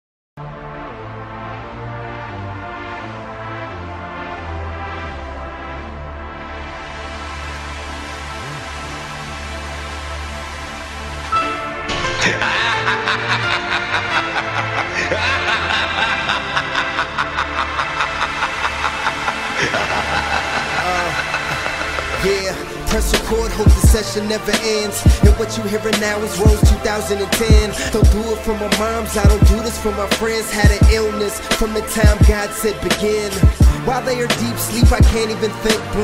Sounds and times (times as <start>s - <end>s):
Music: 0.4s - 36.0s.